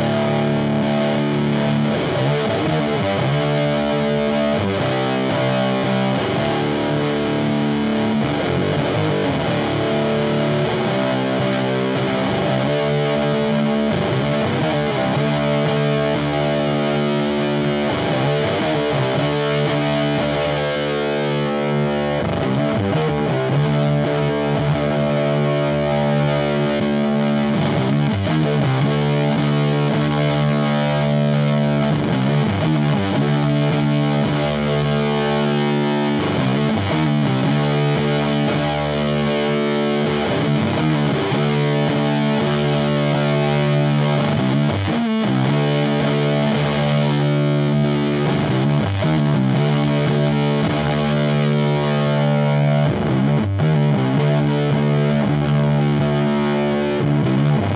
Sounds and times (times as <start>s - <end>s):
Music: 0.0s - 57.7s.